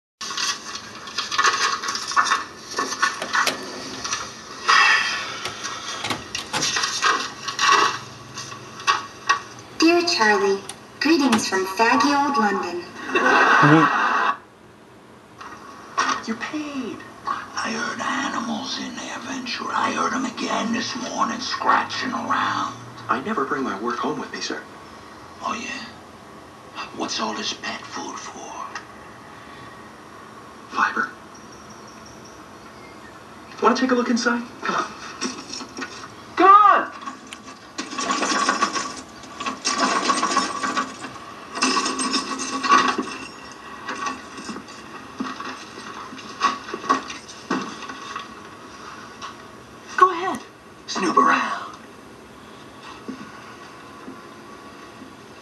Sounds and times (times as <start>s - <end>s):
Television: 0.2s - 55.4s.